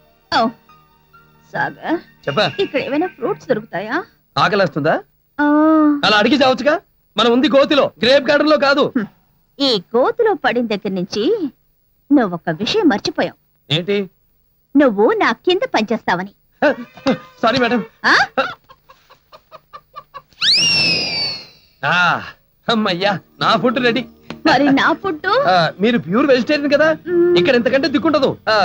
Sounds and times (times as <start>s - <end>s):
Cluck: 18.6s - 20.3s.